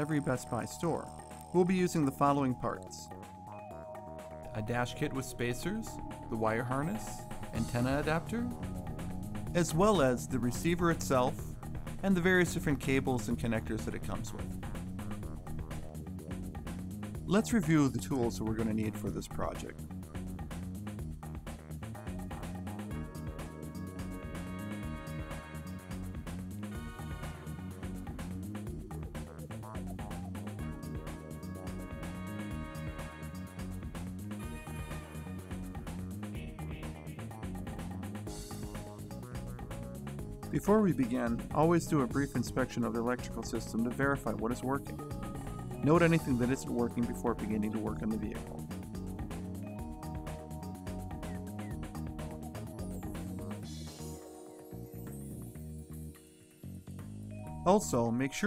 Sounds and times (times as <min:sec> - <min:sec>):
Speech: 0:00.0 - 0:03.1, 0:04.5 - 0:08.6, 0:09.5 - 0:14.6, 0:17.3 - 0:19.8, 0:40.5 - 0:45.0, 0:45.8 - 0:48.6, 0:57.6 - 0:58.4
Music: 0:00.0 - 0:58.4.